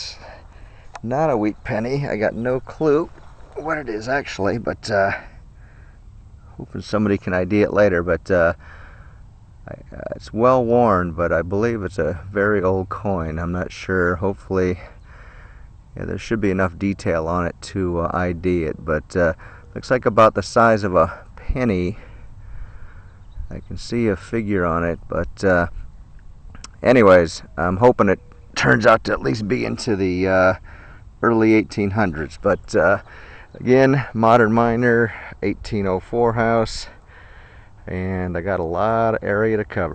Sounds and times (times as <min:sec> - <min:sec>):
Speech: 0:00.0 - 0:00.4, 0:01.0 - 0:05.3, 0:06.5 - 0:08.6, 0:09.6 - 0:15.0, 0:16.0 - 0:22.1, 0:23.5 - 0:25.8, 0:26.6 - 0:30.6, 0:31.2 - 0:37.0, 0:37.8 - 0:39.9.